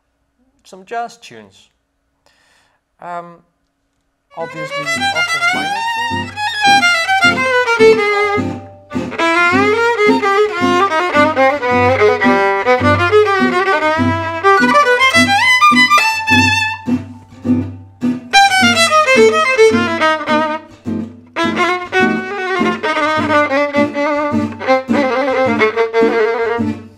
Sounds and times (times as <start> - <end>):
Violin, fiddle: 4.3 - 17.6, 18.3 - 26.9.